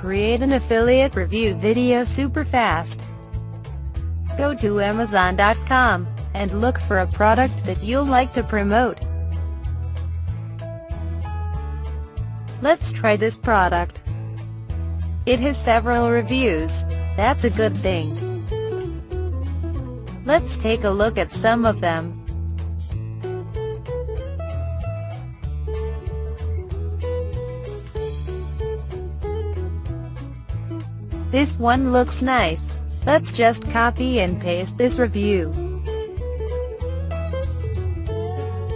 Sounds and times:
Female speech, woman speaking: 0.0 - 3.0, 4.4 - 9.0, 12.6 - 14.0, 15.3 - 18.2, 20.3 - 22.1, 31.4 - 35.6
Narration, monologue: 0.0 - 10.6, 11.3 - 23.2, 30.1 - 36.0
Music: 0.0 - 38.7.

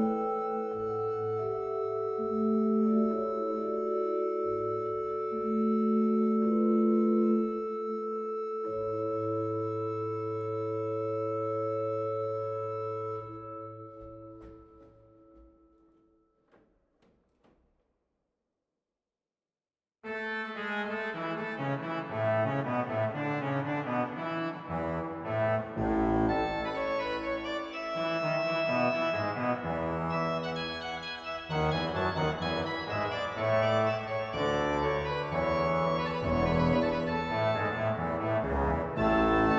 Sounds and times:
Piano: 0.0 - 17.6, 20.1 - 39.5.

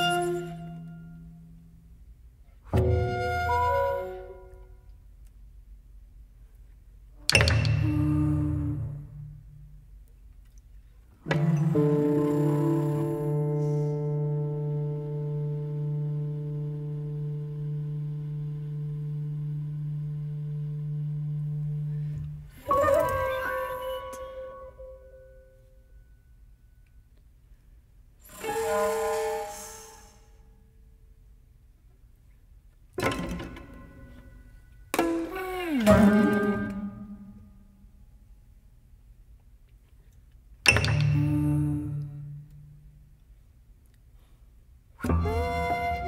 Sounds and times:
Music: 0.0 - 5.4, 6.8 - 27.5, 28.1 - 31.1, 32.9 - 38.3, 40.6 - 43.3, 44.9 - 46.0.

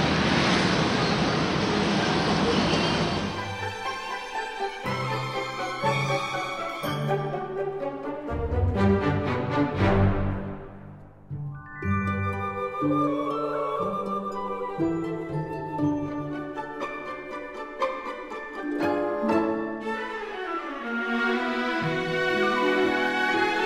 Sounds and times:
Music: 3.2 - 23.6.

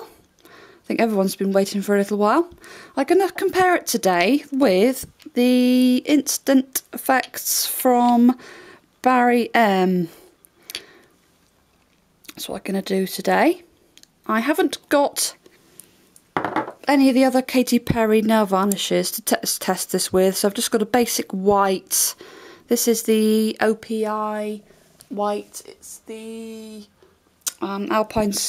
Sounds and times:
Speech: 0.9 - 8.4, 9.0 - 10.2, 12.3 - 13.7, 14.3 - 15.4, 16.9 - 26.9, 27.5 - 28.4.

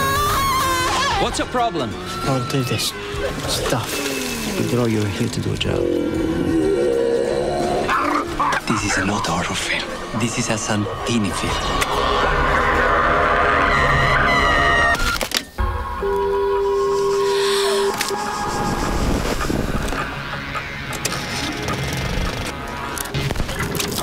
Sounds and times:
Music: 0.0 - 24.0
Speech: 8.7 - 11.8
Sound effect: 10.6 - 24.0.

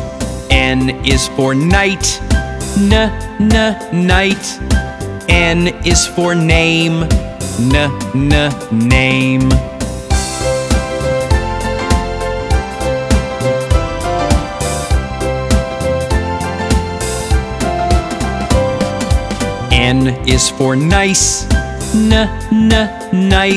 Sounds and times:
Music for children: 0.0 - 23.5.

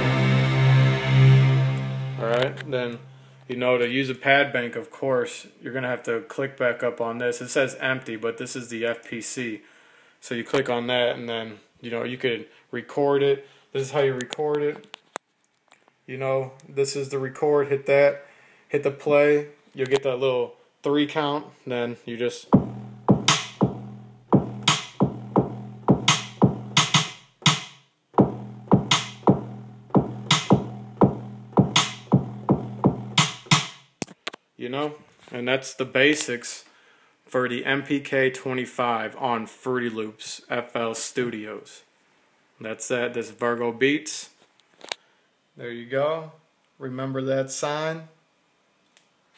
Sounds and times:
Music: 0.0 - 3.3, 22.5 - 33.9
Inside, small room: 0.0 - 49.3.

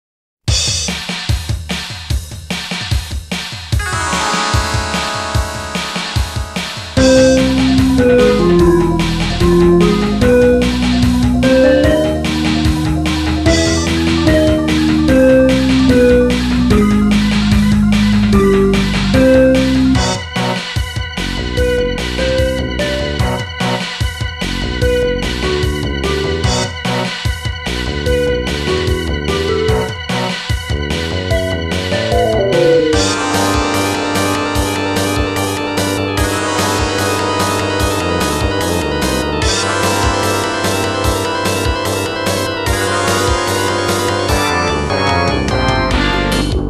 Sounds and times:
Video game music: 3.8 - 20.7, 26.3 - 27.2, 31.3 - 46.7.

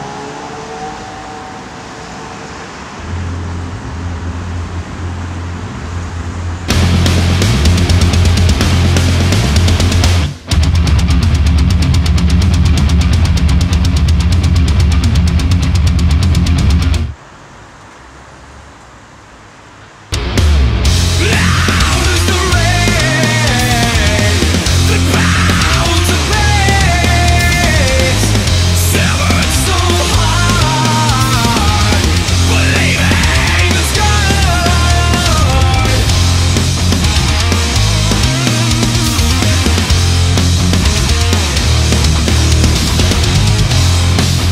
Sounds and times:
Exciting music: 6.7 - 13.8, 20.2 - 44.5.

